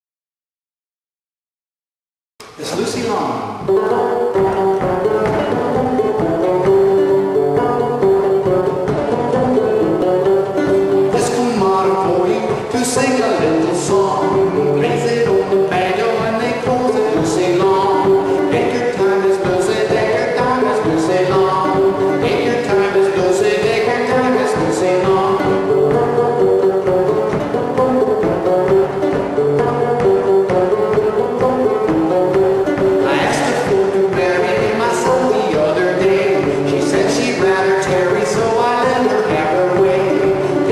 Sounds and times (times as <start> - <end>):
Speech: 2.4 - 4.0, 11.2 - 14.0, 33.0 - 33.7
Banjo: 2.4 - 40.7.